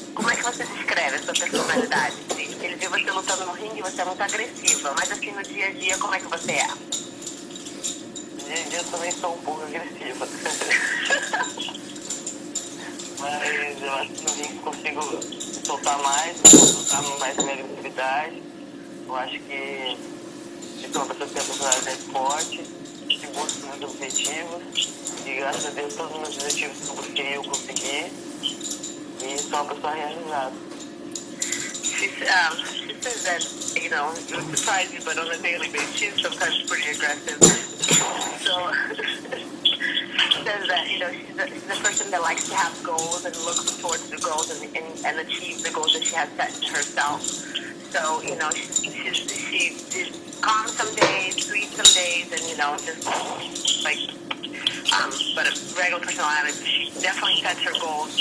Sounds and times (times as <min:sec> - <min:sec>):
Speech: 0:00.2 - 0:06.8, 0:08.4 - 0:10.7, 0:13.2 - 0:18.4, 0:19.1 - 0:20.0, 0:20.8 - 0:28.1, 0:29.2 - 0:30.6, 0:31.6 - 0:58.2.